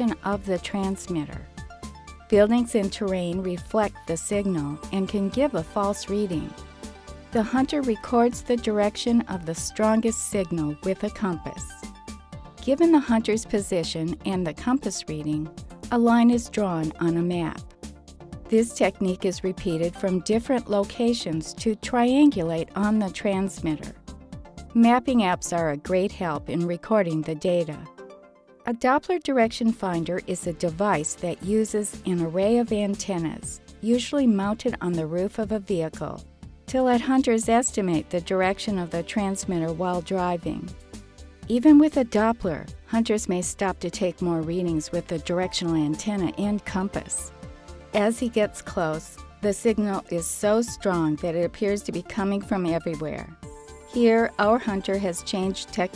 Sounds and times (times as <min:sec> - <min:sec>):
Speech: 0:00.0 - 0:01.4, 0:02.3 - 0:06.5, 0:07.4 - 0:11.8, 0:12.6 - 0:17.6, 0:18.5 - 0:24.0, 0:24.8 - 0:27.9, 0:28.7 - 0:40.7, 0:41.5 - 0:47.3, 0:48.0 - 0:53.3, 0:54.0 - 0:55.9
Music: 0:00.0 - 0:55.9.